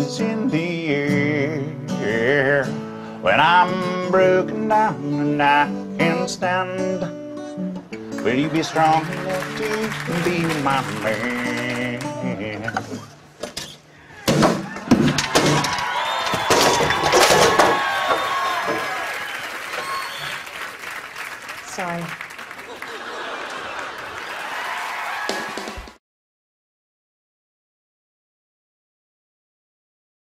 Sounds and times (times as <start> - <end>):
Speech: 21.7 - 22.1.